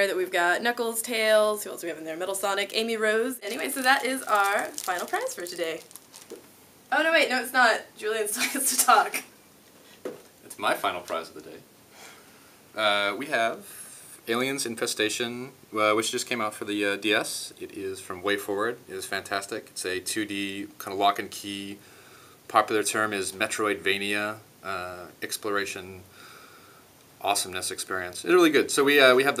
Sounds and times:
Speech: 0:00.0 - 0:05.8, 0:10.5 - 0:11.6, 0:22.5 - 0:26.0, 0:27.2 - 0:29.4
Inside, small room: 0:00.0 - 0:29.4.

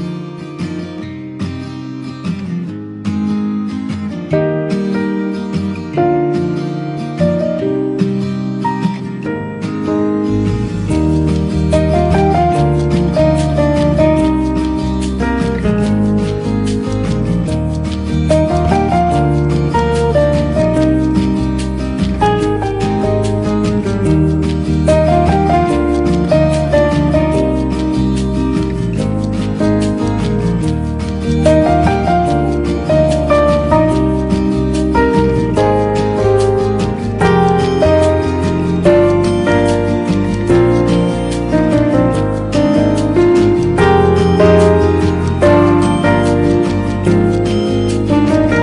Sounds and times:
Soul music: 0:04.3 - 0:48.6.

